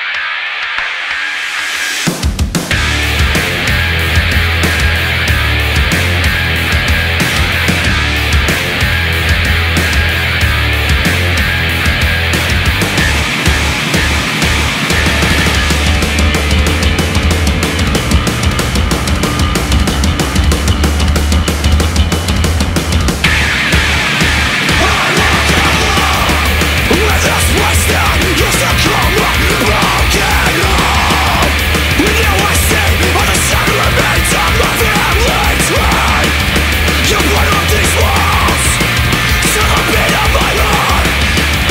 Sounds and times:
Music: 0:00.0 - 0:41.7.

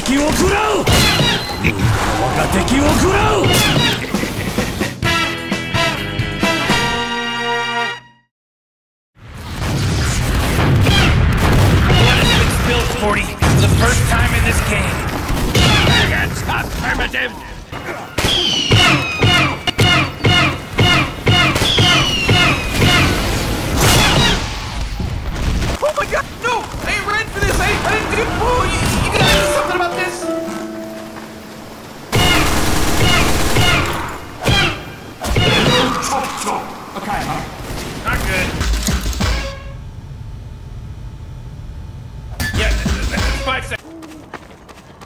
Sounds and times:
Speech: 0:00.0 - 0:00.9, 0:02.2 - 0:03.6, 0:12.0 - 0:15.0, 0:25.8 - 0:30.3, 0:42.5 - 0:43.8.

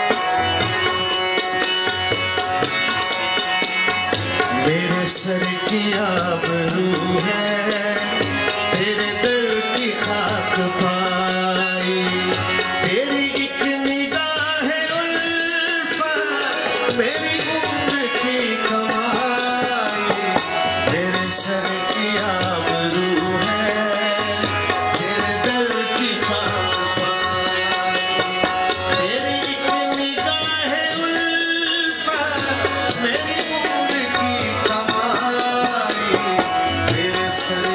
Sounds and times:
Middle Eastern music: 0:00.0 - 0:37.7.

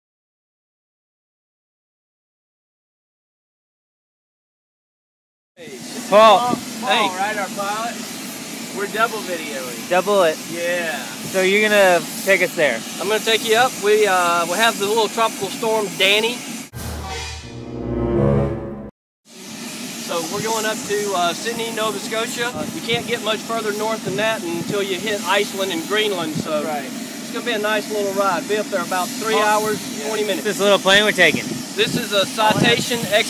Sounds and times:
Speech: 0:05.6 - 0:08.0, 0:08.7 - 0:16.4, 0:20.0 - 0:33.3
Outside, urban or manmade: 0:05.6 - 0:33.3
Music: 0:16.8 - 0:18.9.

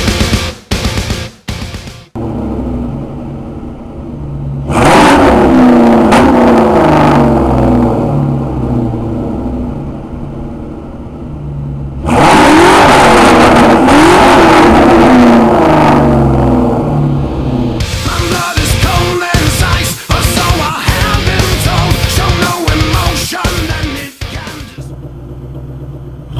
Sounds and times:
Car: 0:00.0 - 0:26.3
Outside, urban or manmade: 0:00.0 - 0:26.3
Accelerating, revving, vroom: 0:04.7 - 0:08.2, 0:12.0 - 0:17.1.

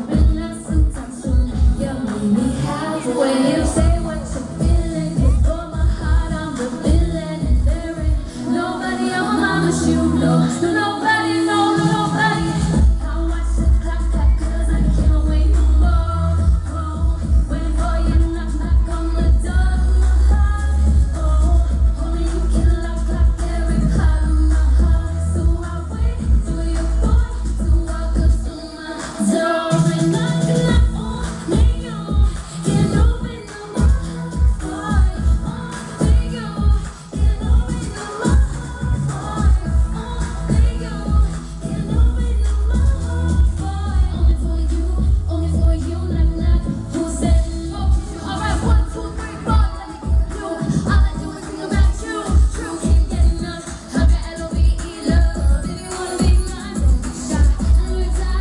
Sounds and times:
Female singing: 0:00.0 - 0:58.4
Music: 0:00.0 - 0:58.4.

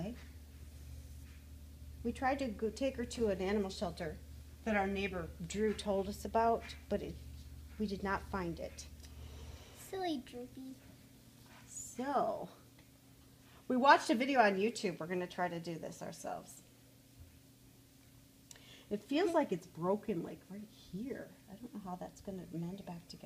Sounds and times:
Speech: 0:02.1 - 0:07.2, 0:18.9 - 0:23.2.

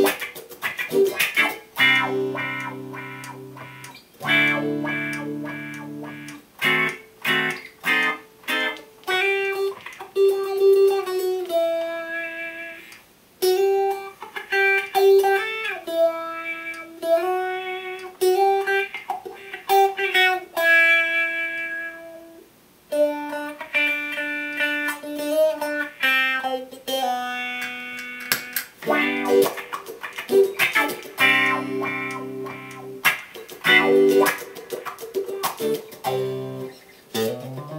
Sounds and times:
Tapping (guitar technique): 0:00.0 - 0:22.1, 0:23.0 - 0:37.7
Effects unit: 0:00.0 - 0:37.7.

